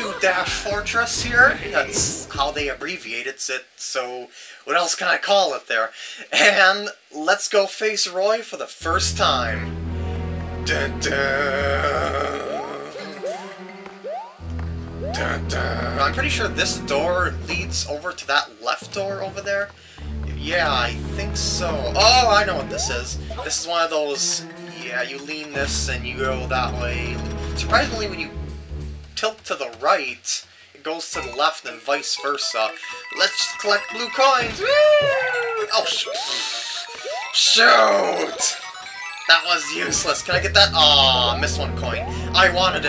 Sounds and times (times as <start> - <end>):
Music: 0.0 - 2.8, 8.8 - 18.2, 18.8 - 29.6, 31.1 - 42.8
Speech: 0.0 - 9.7, 10.7 - 13.1, 15.2 - 19.7, 20.3 - 28.3, 29.2 - 38.6, 39.3 - 42.8.